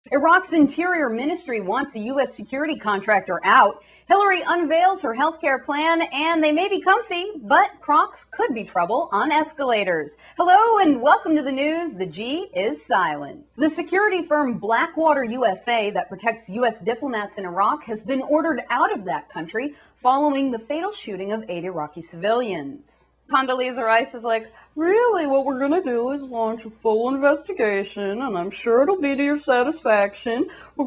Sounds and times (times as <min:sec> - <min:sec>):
Speech: 0:00.0 - 0:30.8.